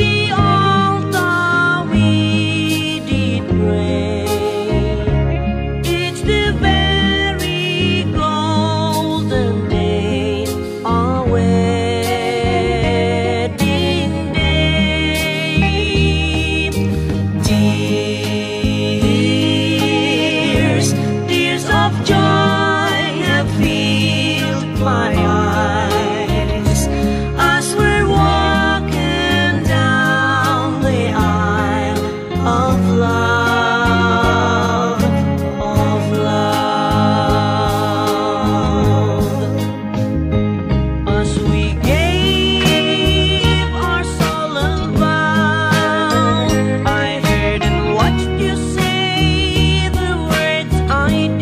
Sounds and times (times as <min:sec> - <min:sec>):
Music: 0:00.0 - 0:51.4.